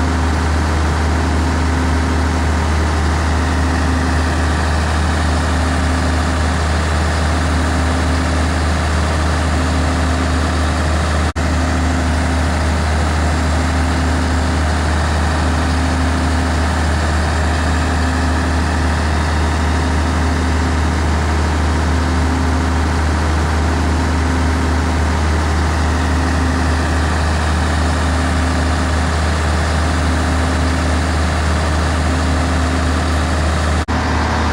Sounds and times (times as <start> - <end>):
Heavy engine (low frequency): 0.0 - 34.5
Truck: 0.0 - 34.5.